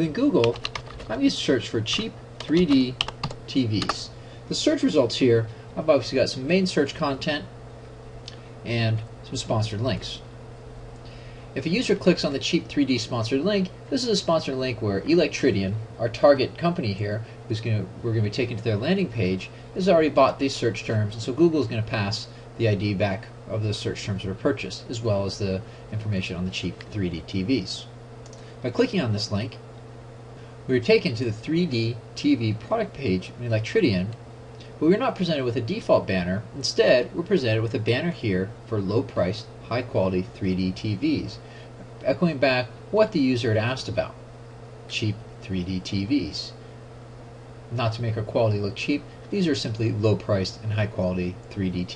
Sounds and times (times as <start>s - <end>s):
Speech: 0.0s - 7.5s, 8.6s - 10.3s, 11.6s - 28.0s, 28.6s - 29.6s, 30.7s - 34.2s, 34.8s - 41.4s, 42.0s - 44.2s, 44.9s - 46.6s, 47.7s - 51.9s.